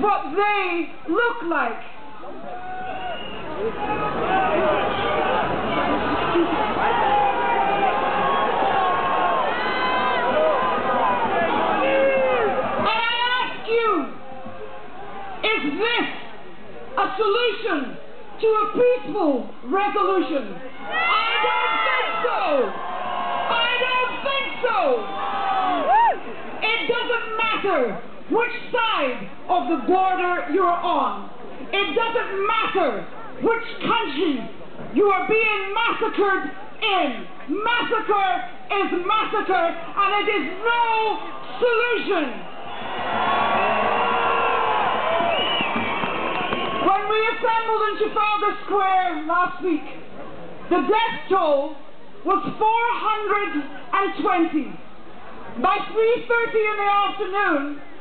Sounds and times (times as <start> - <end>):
Female speech, woman speaking: 0.0 - 1.9, 12.8 - 14.2, 15.5 - 16.2, 17.0 - 20.6, 22.0 - 22.7, 23.5 - 25.1, 26.6 - 42.4, 46.8 - 50.0, 50.7 - 54.8, 55.6 - 57.9.